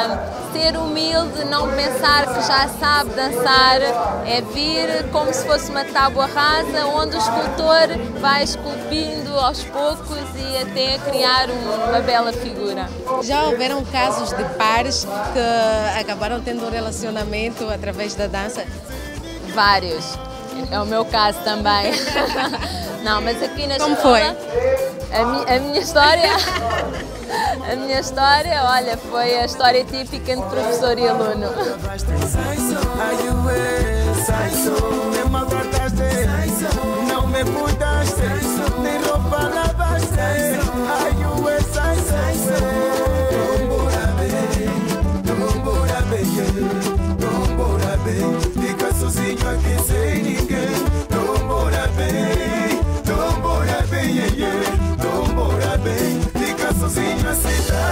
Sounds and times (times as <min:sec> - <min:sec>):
Music of Africa: 0:00.0 - 0:57.9.